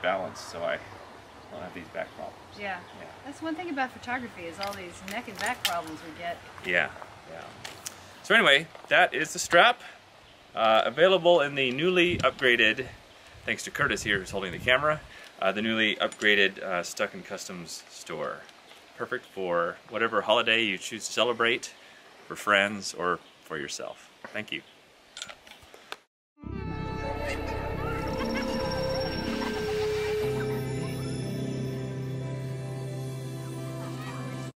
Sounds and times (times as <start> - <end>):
Music: 26.4 - 34.5.